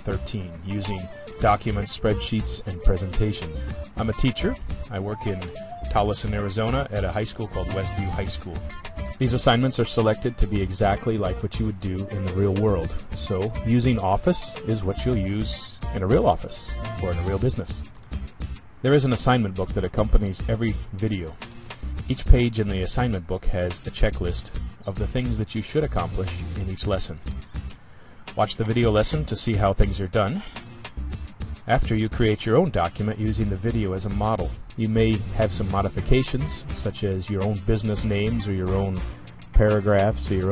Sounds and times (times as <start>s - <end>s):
Speech: 0.0s - 8.6s, 9.2s - 17.8s, 18.8s - 21.4s, 22.1s - 27.2s, 28.3s - 30.6s, 31.7s - 40.5s
Music: 0.0s - 40.5s.